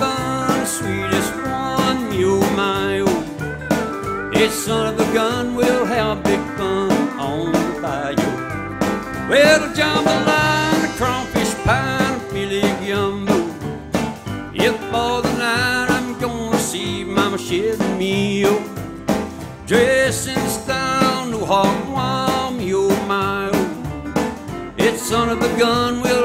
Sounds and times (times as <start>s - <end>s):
Acoustic guitar: 0.0s - 26.2s
Strum: 0.0s - 26.2s.